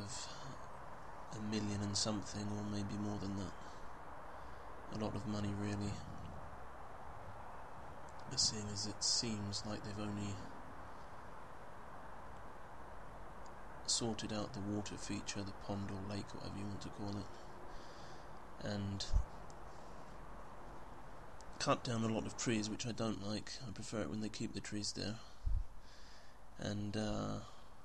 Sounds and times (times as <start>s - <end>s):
Speech: 0.0s - 0.7s, 1.3s - 3.6s, 4.9s - 6.3s, 8.3s - 10.5s, 13.9s - 17.3s, 18.6s - 19.3s, 21.6s - 25.4s, 26.6s - 27.6s.